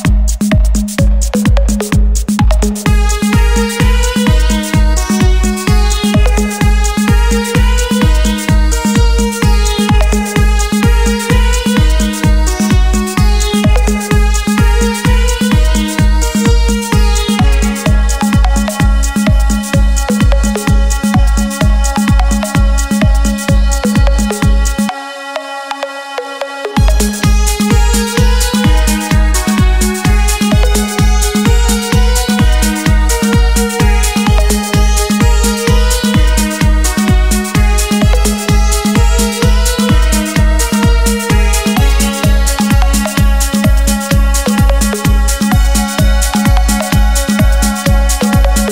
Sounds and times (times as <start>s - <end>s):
Dance music: 0.0s - 48.7s
Dubstep: 0.0s - 48.7s
Electronic dance music: 0.0s - 48.7s
Electronica: 0.0s - 48.7s
Techno: 0.0s - 48.7s
Trance music: 0.0s - 48.7s.